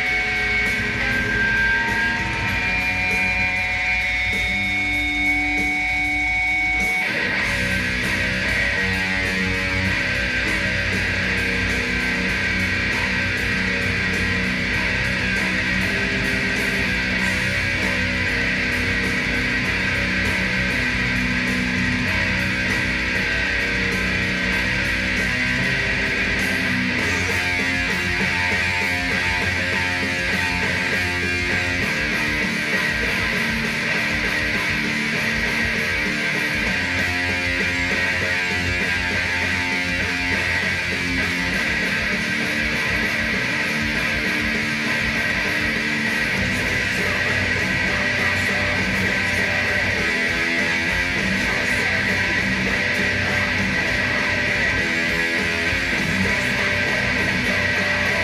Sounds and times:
Bass guitar: 0:00.0 - 0:58.2
Electric guitar: 0:00.0 - 0:58.2.

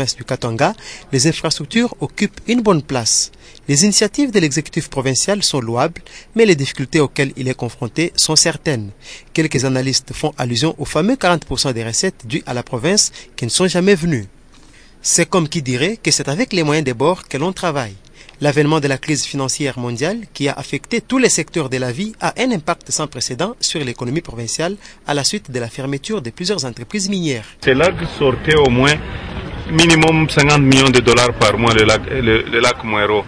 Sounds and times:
Speech: 0:00.0 - 0:14.3, 0:15.0 - 0:29.0, 0:29.7 - 0:33.2.

